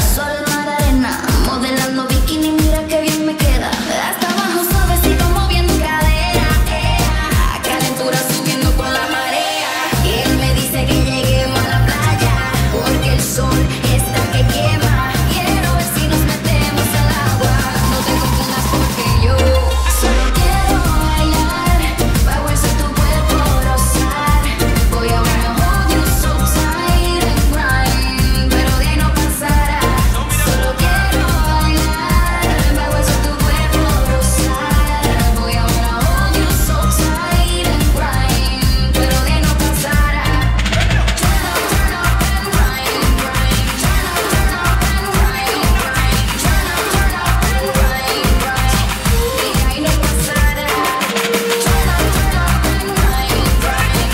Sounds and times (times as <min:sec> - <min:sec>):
Music: 0:00.0 - 0:54.1.